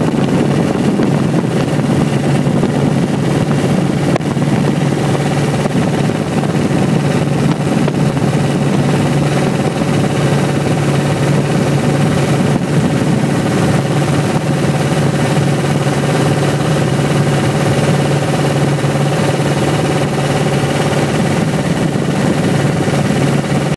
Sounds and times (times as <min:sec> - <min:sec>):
Motorboat, speedboat: 0:00.0 - 0:23.7.